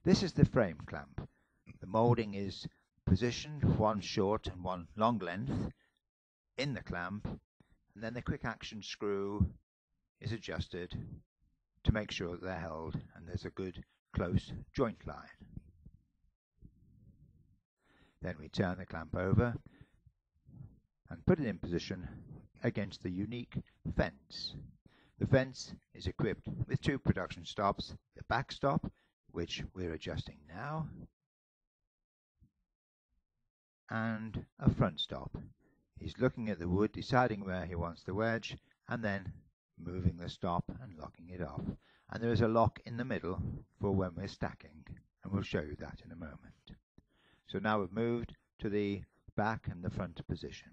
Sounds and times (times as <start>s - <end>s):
Speech: 0.0s - 5.8s, 6.6s - 7.4s, 8.0s - 9.6s, 10.2s - 11.2s, 11.8s - 15.6s, 18.2s - 19.7s, 21.1s - 31.1s, 33.9s - 46.8s, 47.4s - 50.7s.